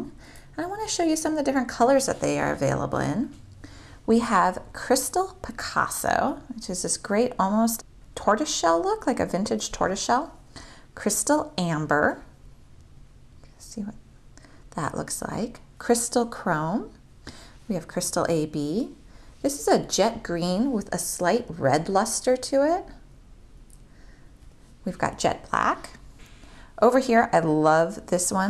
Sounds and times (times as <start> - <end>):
Speech: 0.0 - 3.4, 4.1 - 10.4, 11.0 - 12.3, 13.6 - 14.0, 14.8 - 17.0, 17.7 - 23.0, 24.9 - 26.0, 26.8 - 28.5.